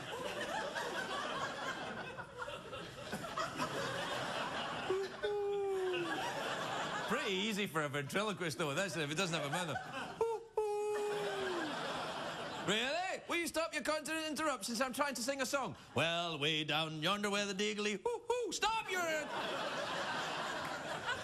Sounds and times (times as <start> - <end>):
Speech: 7.1 - 9.8, 12.7 - 19.3.